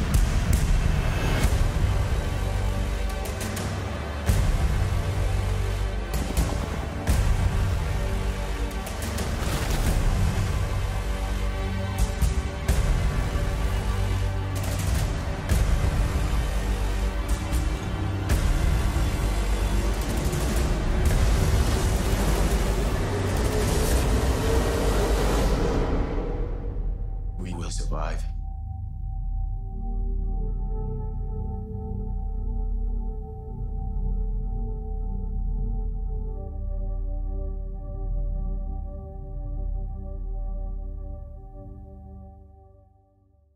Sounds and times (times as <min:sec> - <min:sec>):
Ambient music: 0:00.0 - 0:43.5
Speech: 0:27.4 - 0:28.4.